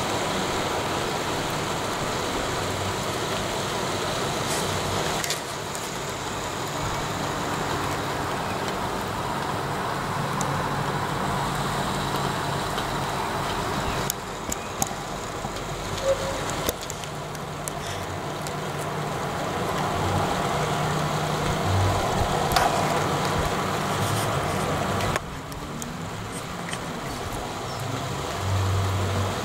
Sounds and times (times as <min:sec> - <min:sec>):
Rain on surface: 0:00.0 - 0:29.4.